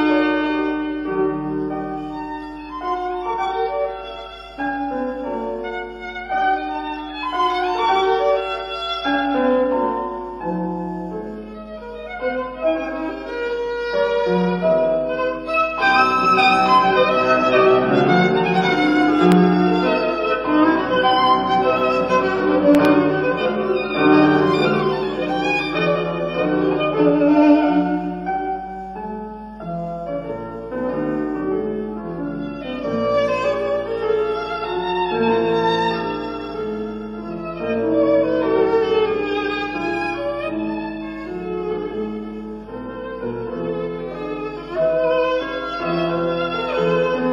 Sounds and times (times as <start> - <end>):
Violin, fiddle: 0.0 - 47.3.